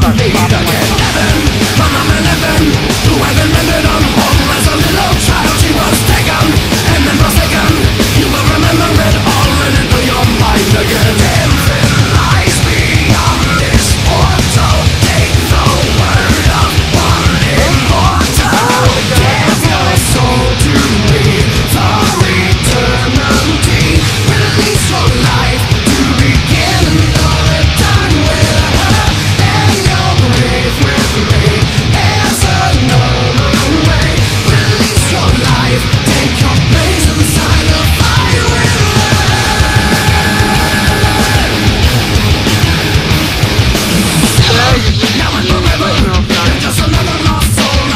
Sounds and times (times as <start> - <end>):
Angry music: 0.0 - 47.9.